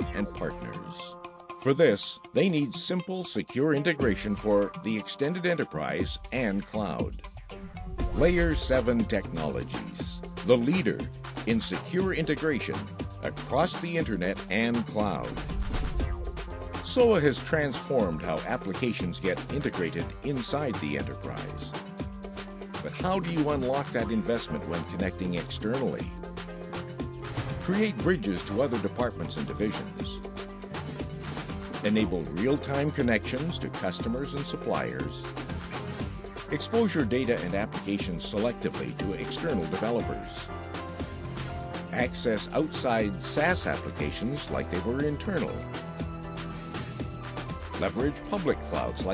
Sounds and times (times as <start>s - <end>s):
Speech: 0.0s - 7.2s, 8.2s - 15.4s, 16.8s - 21.8s, 22.8s - 26.1s, 27.6s - 30.2s, 31.8s - 35.3s, 36.5s - 40.5s, 41.9s - 45.7s, 47.8s - 49.1s
Music: 0.0s - 49.1s.